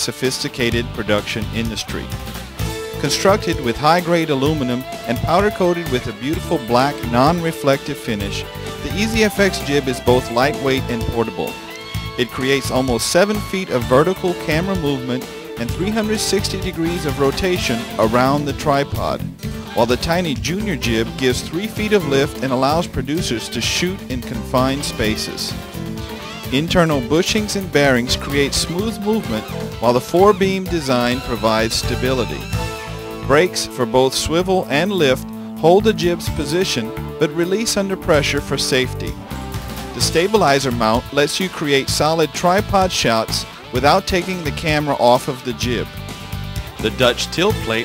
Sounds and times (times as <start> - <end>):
Speech: 0.0 - 2.1, 3.0 - 11.6, 12.2 - 25.6, 26.5 - 32.5, 33.3 - 39.2, 40.0 - 45.9, 46.8 - 47.8
Music: 0.0 - 47.8.